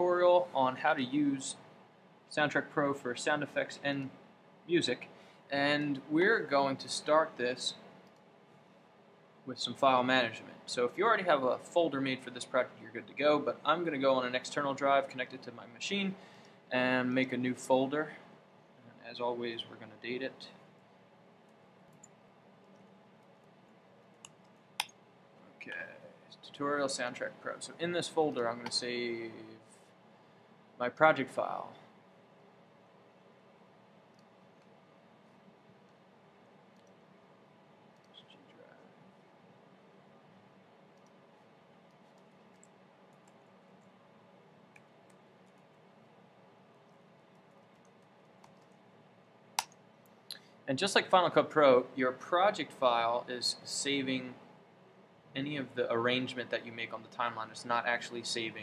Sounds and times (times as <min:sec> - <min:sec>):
Speech: 0:00.0 - 0:01.6, 0:02.3 - 0:07.8, 0:09.5 - 0:20.6, 0:25.6 - 0:29.6, 0:30.8 - 0:31.8, 0:50.7 - 0:54.4, 0:55.4 - 0:58.6.